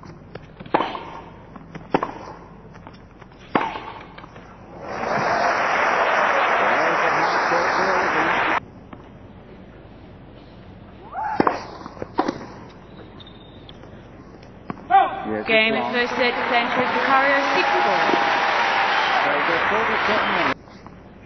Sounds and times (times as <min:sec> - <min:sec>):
Inside, public space: 0:03.8 - 0:21.2.